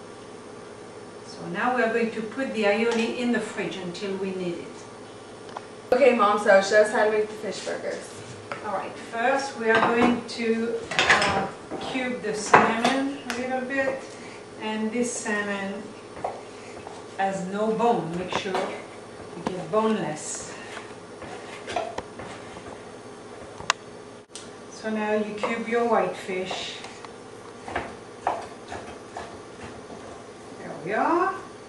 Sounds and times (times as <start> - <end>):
Speech: 1.3 - 4.9, 6.0 - 14.0, 14.6 - 15.9, 17.2 - 18.8, 19.4 - 20.6, 24.8 - 26.9, 30.6 - 31.5.